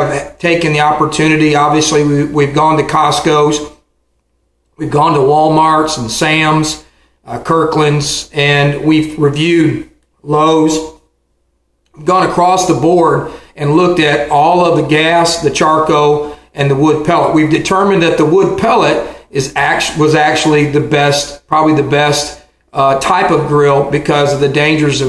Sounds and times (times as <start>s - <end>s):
Speech: 0.0s - 3.8s, 4.8s - 11.1s, 11.9s - 25.0s.